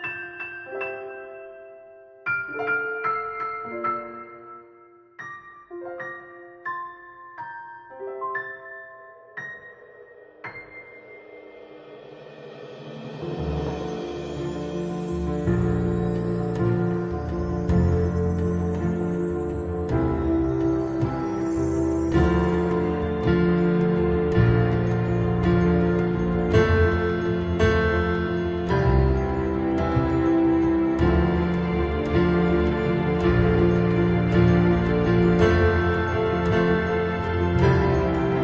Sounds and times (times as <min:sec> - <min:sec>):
Sad music: 0:00.0 - 0:38.4.